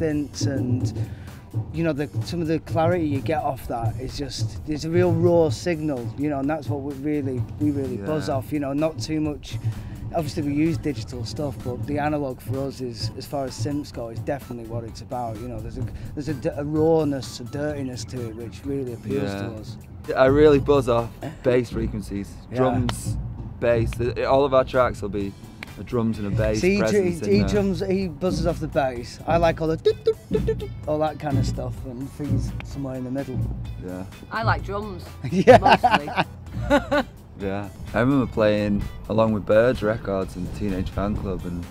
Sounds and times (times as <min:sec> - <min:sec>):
Speech: 0:00.0 - 0:01.0, 0:01.8 - 0:21.0, 0:21.6 - 0:36.2, 0:37.4 - 0:41.7
Music: 0:00.0 - 0:41.7.